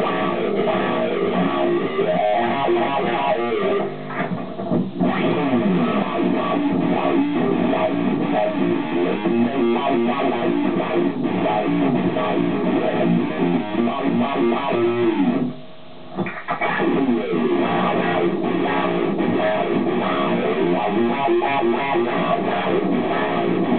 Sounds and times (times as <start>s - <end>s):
Music: 0.0s - 23.7s.